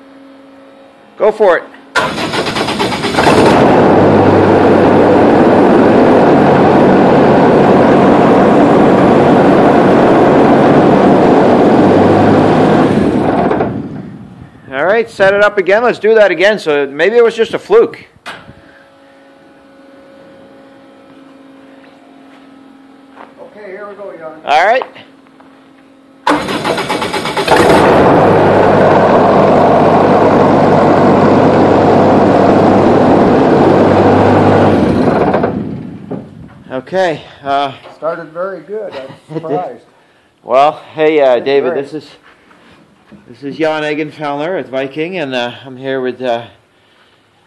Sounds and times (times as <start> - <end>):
Speech: 1.2 - 1.8, 14.7 - 18.1, 23.4 - 25.1, 36.7 - 42.2, 43.3 - 46.6
Engine starting: 2.0 - 3.8, 26.3 - 28.1
Heavy engine (low frequency): 2.0 - 14.7, 26.2 - 36.7.